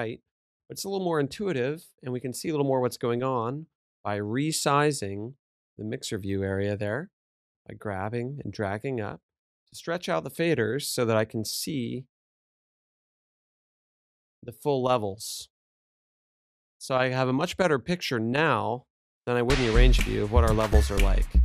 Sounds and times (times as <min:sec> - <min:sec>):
Speech: 0:00.0 - 0:07.1, 0:07.7 - 0:09.2, 0:09.8 - 0:12.1, 0:14.4 - 0:15.5, 0:16.8 - 0:21.4.